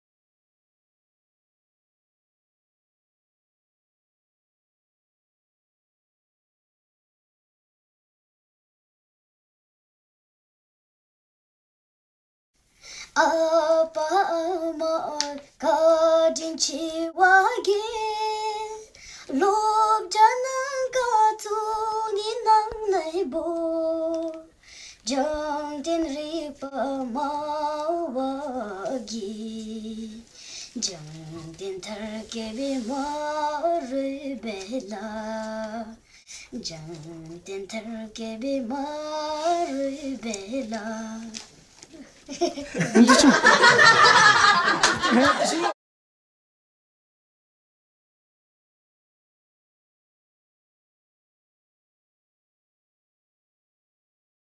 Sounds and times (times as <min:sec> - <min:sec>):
Child singing: 0:13.1 - 0:41.4.